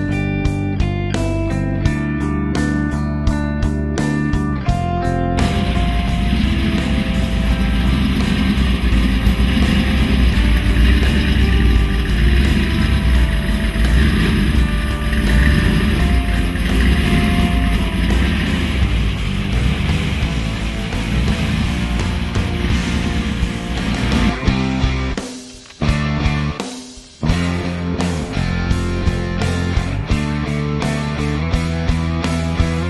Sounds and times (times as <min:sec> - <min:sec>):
Car: 0:00.0 - 0:25.2, 0:27.3 - 0:32.9
Music: 0:00.0 - 0:32.9.